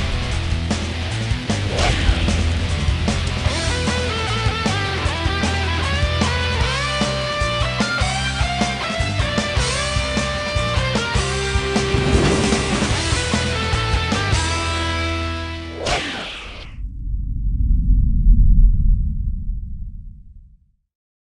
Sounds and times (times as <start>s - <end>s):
Music: 0.0s - 16.7s.